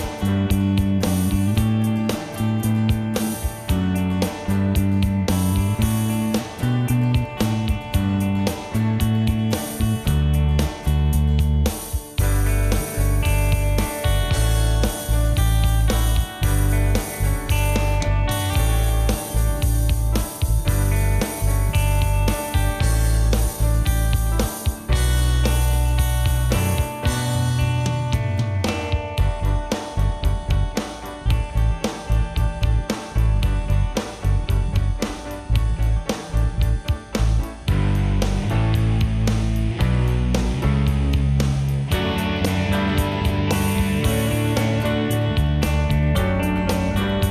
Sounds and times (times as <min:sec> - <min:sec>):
Music: 0:00.0 - 0:47.3.